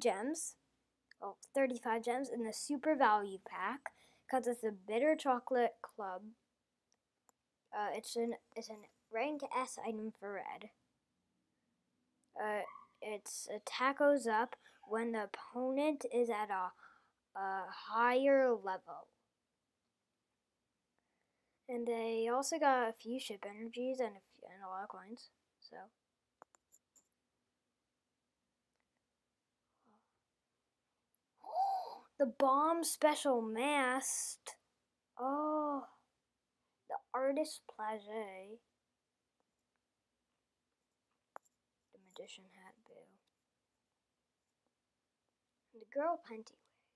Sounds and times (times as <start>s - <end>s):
Speech: 0.0s - 0.6s, 1.2s - 6.4s, 7.8s - 10.8s, 12.4s - 16.8s, 17.4s - 19.1s, 21.7s - 25.9s, 32.2s - 34.6s, 35.2s - 36.0s, 36.9s - 38.7s, 42.0s - 43.2s, 45.8s - 46.6s.